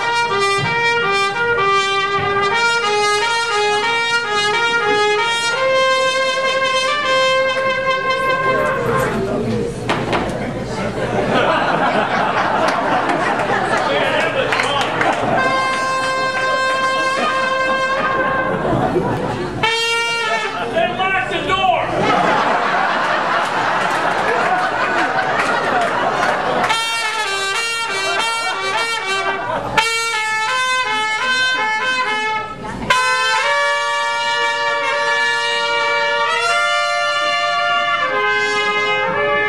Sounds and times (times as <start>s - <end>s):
Music: 0.0s - 9.2s, 15.2s - 18.7s, 26.6s - 39.4s
Speech: 8.2s - 11.3s, 13.8s - 15.1s, 20.2s - 22.0s.